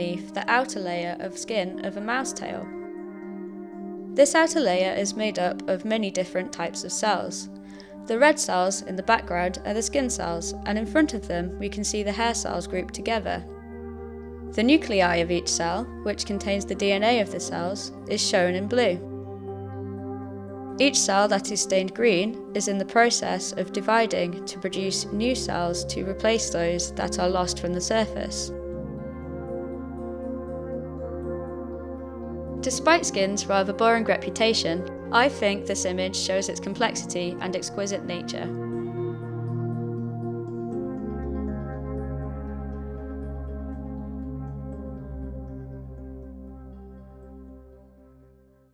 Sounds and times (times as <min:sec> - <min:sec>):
Speech: 0:00.0 - 0:02.7, 0:04.2 - 0:07.5, 0:08.1 - 0:13.4, 0:14.6 - 0:19.0, 0:20.8 - 0:28.5, 0:32.6 - 0:38.5
Music: 0:00.0 - 0:48.7.